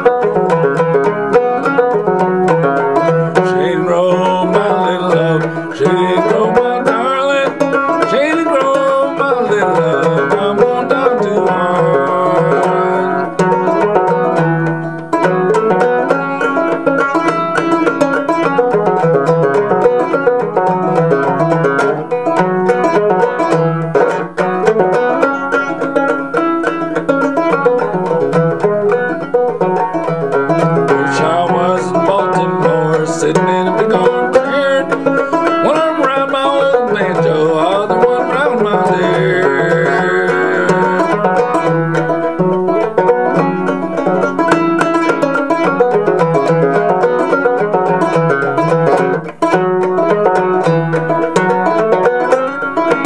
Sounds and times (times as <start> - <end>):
Banjo: 0.0 - 53.0.